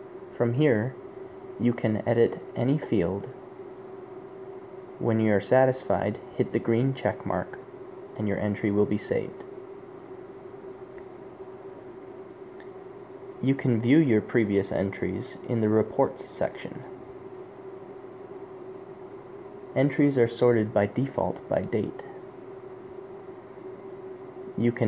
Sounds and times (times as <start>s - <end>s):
Speech: 0.4s - 1.0s, 1.6s - 3.4s, 5.0s - 7.6s, 8.2s - 9.5s, 13.4s - 16.9s, 19.8s - 22.2s, 24.6s - 24.8s.